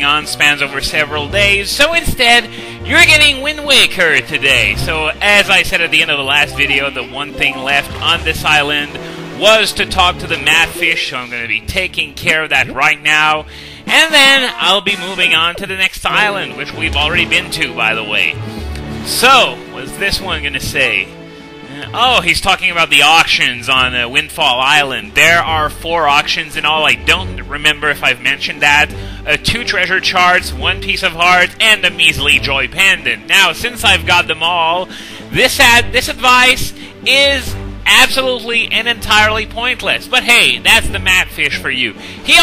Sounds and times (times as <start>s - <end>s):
Speech: 0.0s - 18.4s, 19.1s - 21.1s, 21.7s - 42.4s
Music: 0.0s - 42.4s.